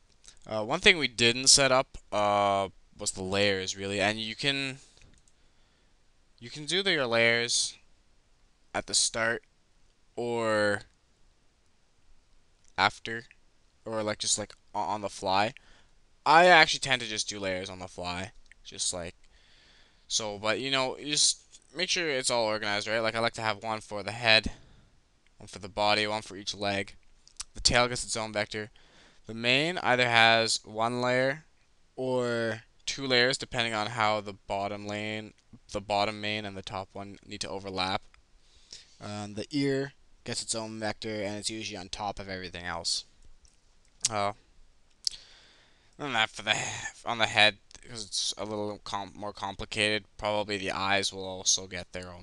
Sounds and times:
Speech: 0.4 - 4.8, 6.4 - 7.8, 8.8 - 9.5, 10.2 - 10.9, 12.8 - 15.6, 16.3 - 19.2, 20.1 - 24.6, 25.4 - 28.7, 29.3 - 38.1, 39.0 - 43.1, 44.1 - 44.4, 46.0 - 52.2.

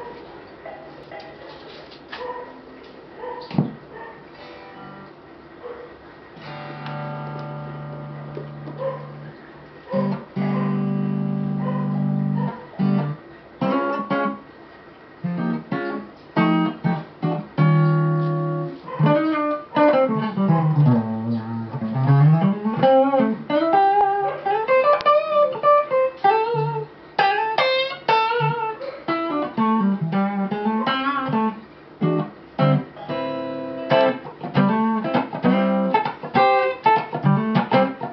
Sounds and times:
Electric guitar: 4.4 - 5.2, 6.4 - 14.5, 15.2 - 38.1
Strum: 15.3 - 38.1.

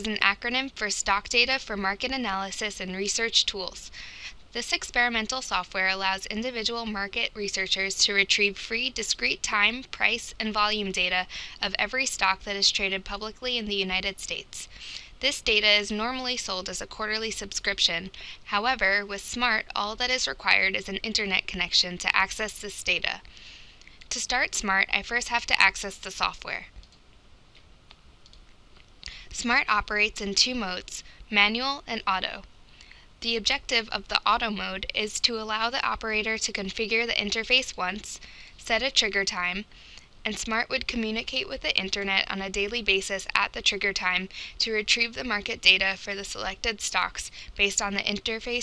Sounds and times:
Speech: 0.0 - 23.3, 24.1 - 26.7, 29.1 - 32.5, 33.2 - 48.6.

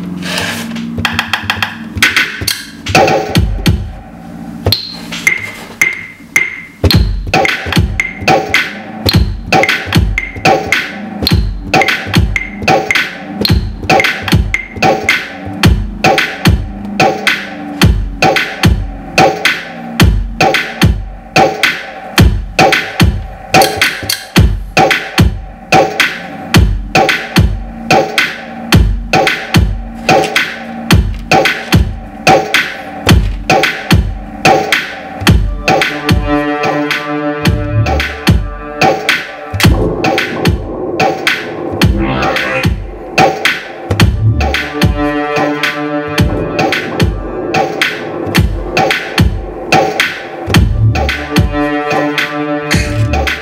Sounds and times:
Dubstep: 0.0 - 53.4.

